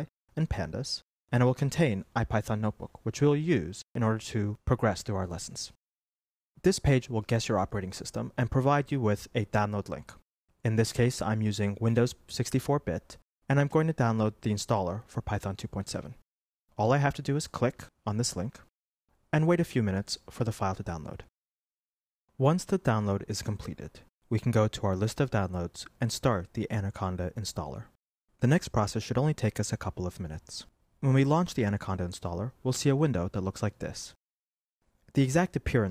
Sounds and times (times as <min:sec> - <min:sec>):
Speech: 0:00.0 - 0:05.8, 0:06.6 - 0:16.2, 0:16.8 - 0:18.7, 0:19.3 - 0:21.3, 0:22.4 - 0:34.2, 0:35.1 - 0:35.9.